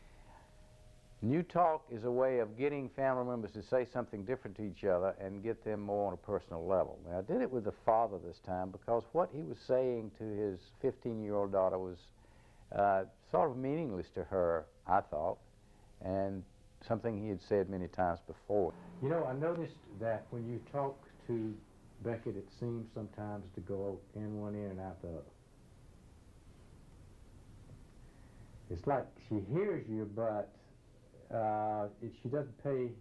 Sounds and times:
Speech: 1.2s - 12.1s, 12.7s - 15.4s, 16.0s - 25.3s, 28.7s - 30.7s, 31.3s - 33.0s.

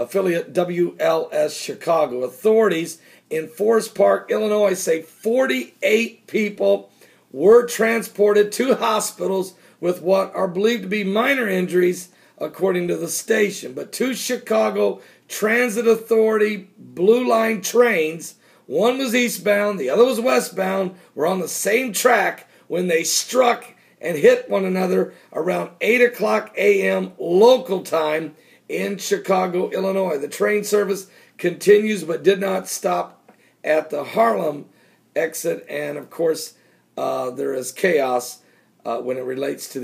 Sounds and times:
Speech: 0.0s - 39.8s.

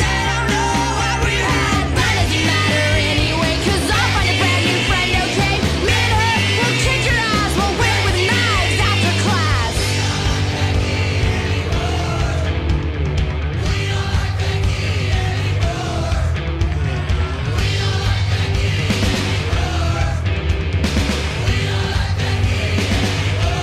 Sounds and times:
Singing: 0.0s - 12.7s, 13.6s - 20.3s, 21.3s - 23.6s
Punk rock: 0.0s - 23.6s.

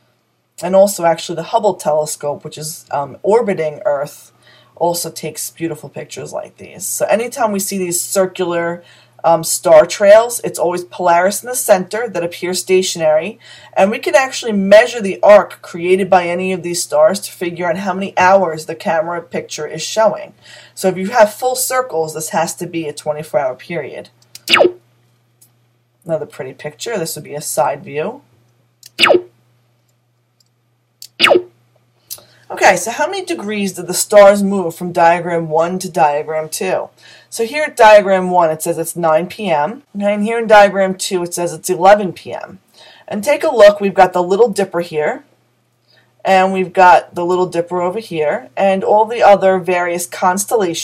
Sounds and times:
Inside, small room: 0.0s - 50.8s
Speech: 0.6s - 24.2s, 26.0s - 28.3s, 32.1s - 45.3s, 46.2s - 50.8s.

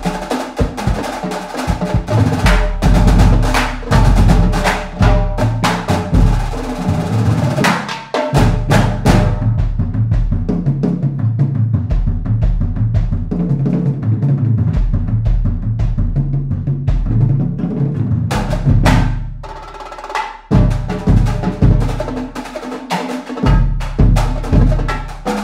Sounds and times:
Bass drum: 0.0s - 22.6s, 23.4s - 25.4s
Drum roll: 0.0s - 25.4s.

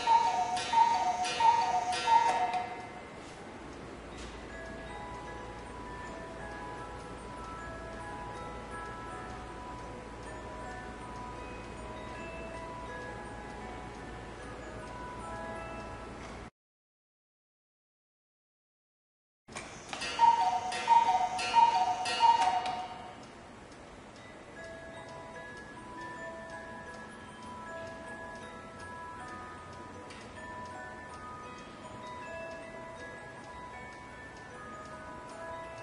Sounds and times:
Tick-tock: 19.6s - 35.8s.

